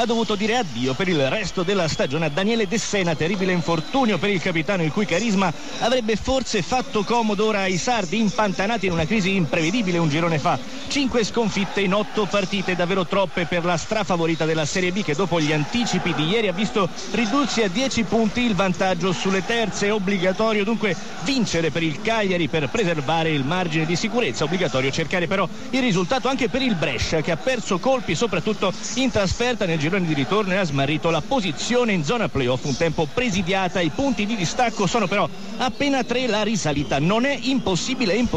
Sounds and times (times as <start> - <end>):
Speech: 0.0 - 38.3.